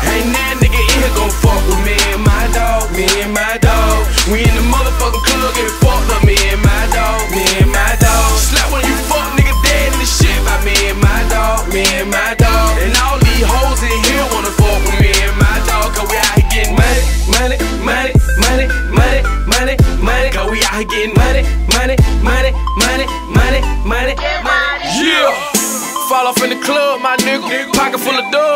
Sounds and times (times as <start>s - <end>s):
Music: 0.0s - 28.5s.